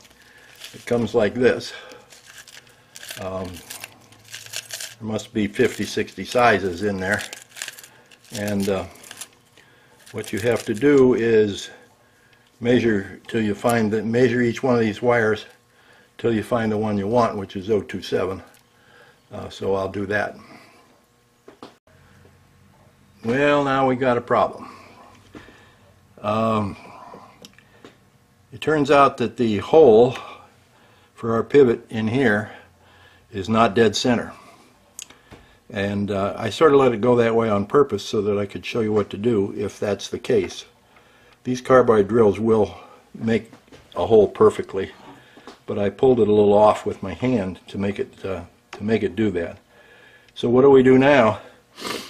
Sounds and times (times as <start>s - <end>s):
Speech: 0.7s - 1.9s, 3.2s - 3.7s, 5.0s - 7.3s, 8.3s - 9.0s, 10.1s - 11.9s, 12.6s - 15.6s, 16.2s - 18.6s, 19.3s - 20.5s, 23.2s - 24.8s, 26.2s - 27.0s, 28.5s - 30.4s, 31.2s - 32.6s, 33.3s - 34.4s, 35.7s - 40.8s, 41.4s - 45.1s, 45.7s - 49.6s, 50.4s - 51.5s.